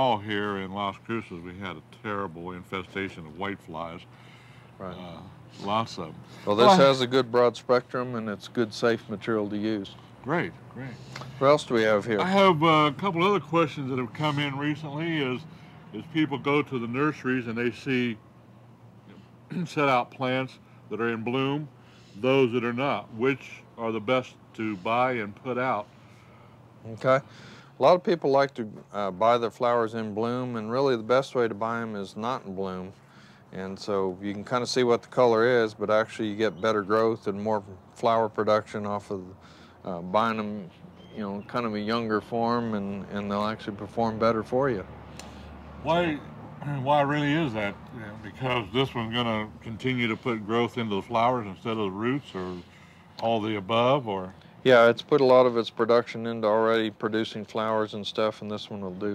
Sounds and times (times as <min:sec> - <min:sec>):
Speech: 0:00.0 - 0:04.1, 0:04.8 - 0:18.2, 0:19.5 - 0:25.9, 0:26.8 - 0:44.9, 0:45.8 - 0:59.1.